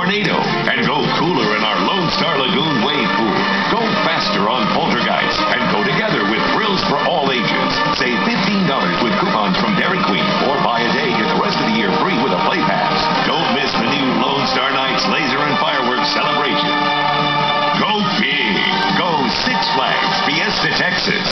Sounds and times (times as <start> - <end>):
Speech: 0.0 - 16.7, 17.8 - 21.3
Music: 0.0 - 21.3.